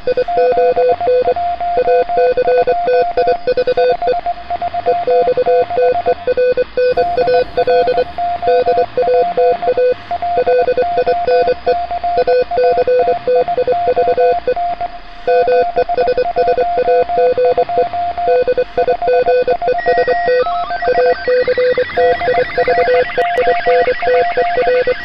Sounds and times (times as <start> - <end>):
Radio: 7.0 - 8.3, 20.4 - 25.0.